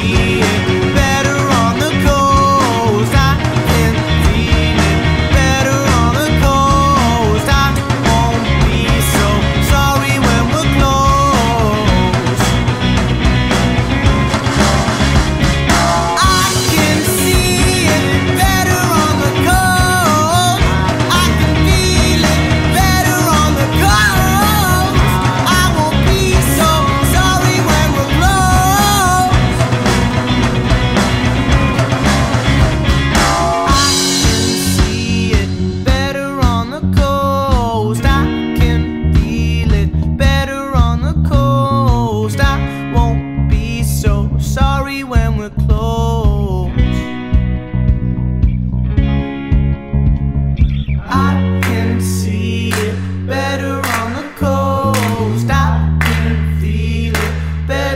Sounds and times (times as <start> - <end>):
Music: 0.0 - 57.9.